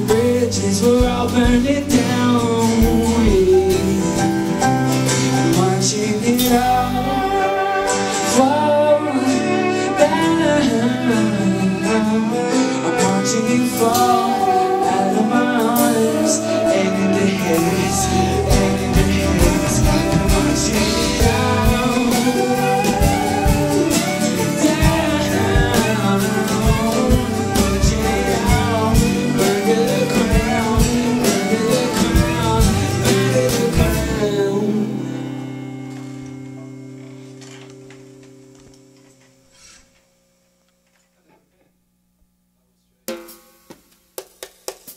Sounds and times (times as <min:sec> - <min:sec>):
Drum: 0:00.0 - 0:04.8, 0:17.0 - 0:34.2, 0:43.1 - 0:44.9
Bass guitar: 0:00.0 - 0:39.2.